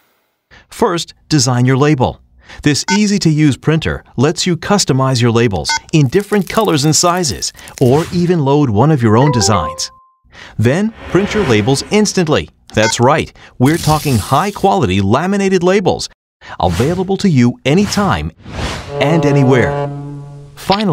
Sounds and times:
Speech: 0.6 - 9.9, 10.6 - 19.9, 20.6 - 20.9.

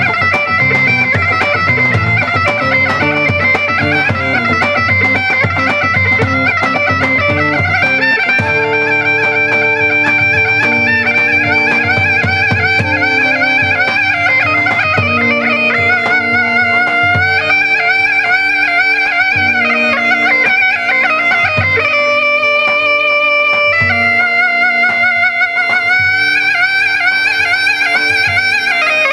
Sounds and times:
Bagpipes: 0.0 - 29.1
Wind instrument, woodwind instrument: 0.0 - 29.1.

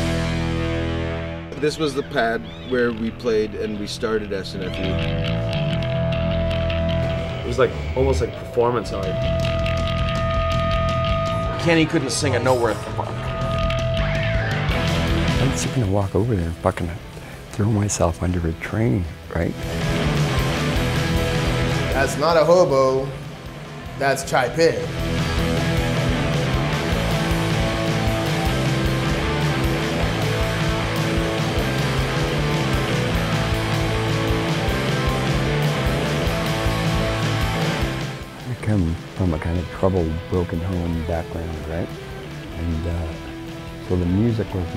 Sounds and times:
Music: 0.0 - 44.7
Speech: 1.6 - 5.1, 7.5 - 9.2, 11.6 - 12.9, 15.4 - 17.0, 17.6 - 19.6, 22.0 - 23.2, 24.0 - 24.9, 38.5 - 41.9, 42.6 - 43.2, 43.9 - 44.7.

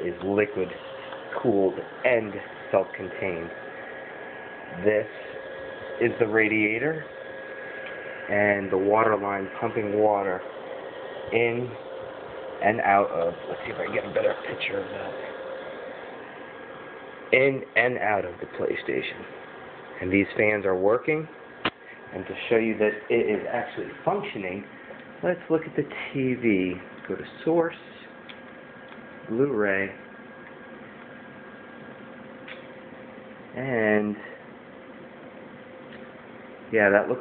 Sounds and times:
Speech: 0.0 - 3.6, 4.7 - 5.4, 6.0 - 7.1, 8.3 - 10.5, 11.3 - 11.8, 12.6 - 15.4, 17.3 - 19.4, 20.0 - 21.4, 22.1 - 28.2, 29.3 - 30.0, 33.6 - 34.4, 36.7 - 37.2.

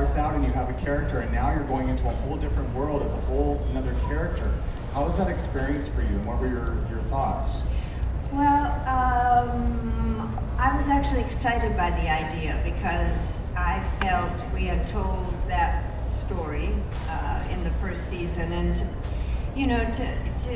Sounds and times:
Male speech, man speaking: 0.0 - 7.6
Conversation: 0.0 - 20.5
Narration, monologue: 0.0 - 20.5
Female speech, woman speaking: 8.3 - 19.0, 19.6 - 20.5.

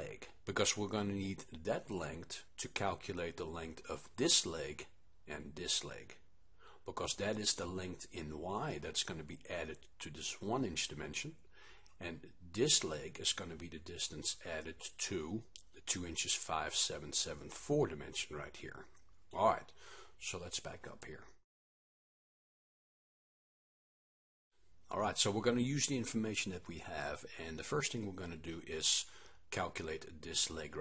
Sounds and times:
Speech: 0.0 - 6.2, 6.8 - 11.4, 12.0 - 21.4, 24.9 - 30.8.

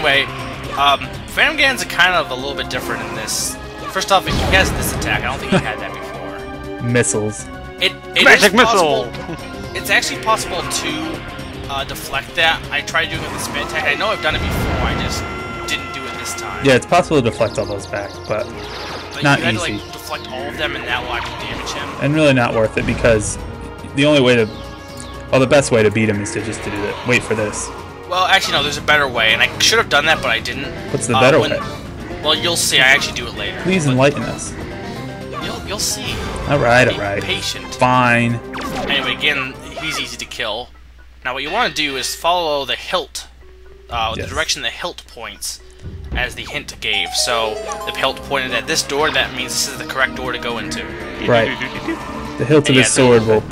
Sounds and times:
Music: 0.0 - 53.5
Speech: 6.8 - 9.2, 9.8 - 18.5, 19.2 - 24.5, 25.3 - 31.7, 35.4 - 40.7, 41.3 - 43.3, 43.9 - 45.6, 46.2 - 53.5.

